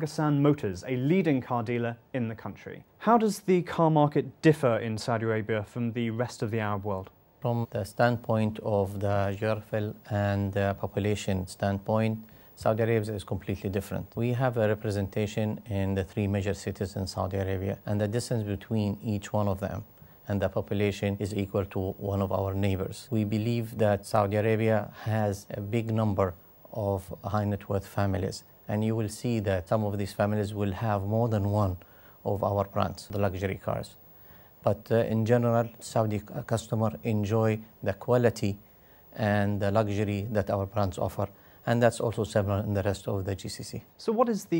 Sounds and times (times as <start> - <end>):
Speech: 0.0 - 34.0, 34.6 - 44.5.